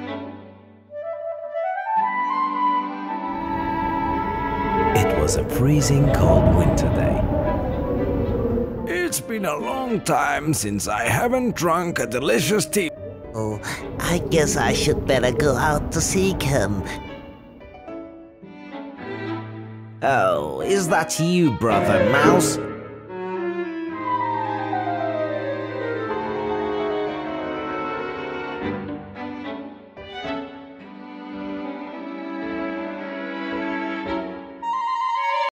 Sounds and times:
Music: 0.0s - 7.7s, 8.4s - 35.5s.

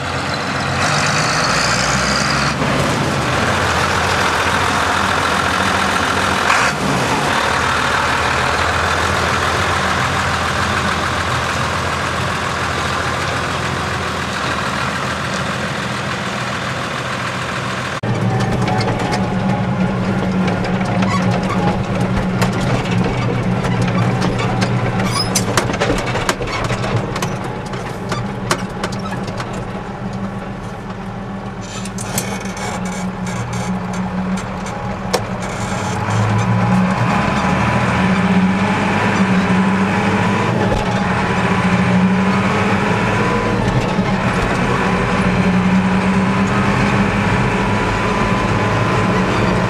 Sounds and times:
Truck: 0.0s - 49.6s.

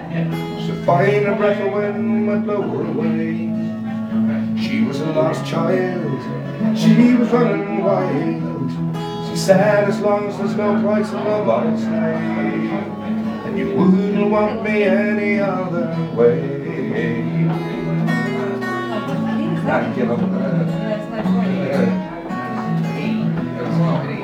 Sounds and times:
Music: 0.0s - 24.2s.

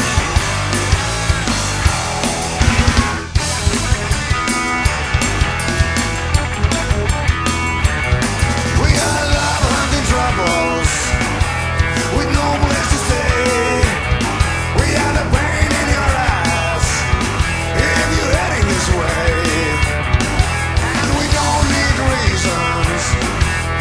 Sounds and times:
Music: 0.0s - 23.8s.

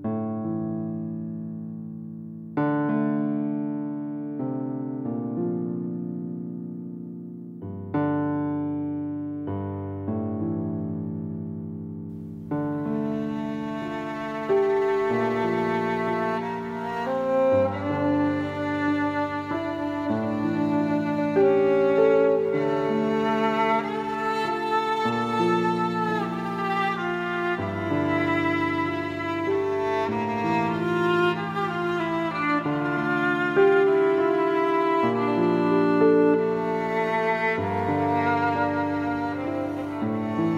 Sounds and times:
Violin, fiddle: 12.7s - 40.5s.

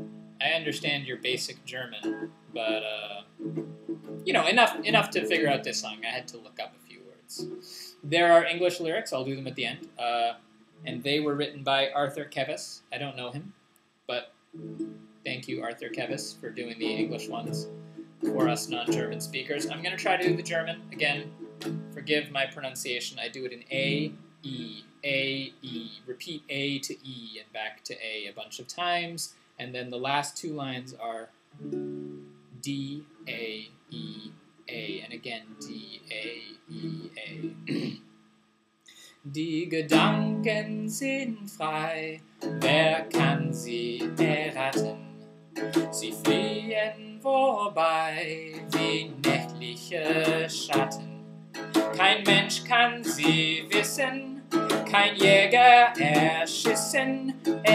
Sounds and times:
Music: 0.0s - 8.8s, 14.6s - 23.0s, 23.7s - 24.8s, 31.6s - 38.2s, 39.6s - 47.2s, 48.0s - 57.7s
Speech: 0.4s - 3.2s, 4.3s - 13.5s, 15.3s - 17.6s, 18.3s - 21.2s, 22.0s - 31.3s, 32.6s - 38.0s, 39.3s - 45.1s, 46.0s - 51.1s, 52.0s - 57.7s.

